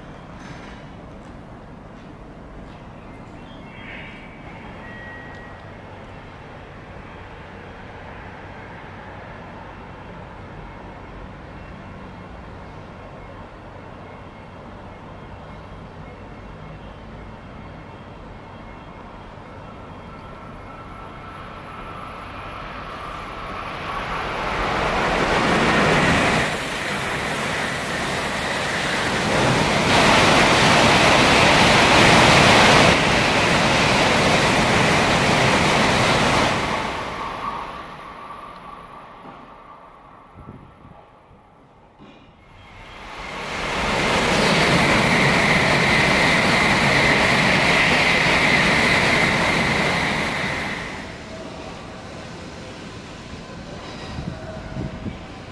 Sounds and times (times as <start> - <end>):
Railroad car, train wagon: 0.0 - 55.5
Subway, metro, underground: 0.0 - 55.5
Train: 0.0 - 55.5.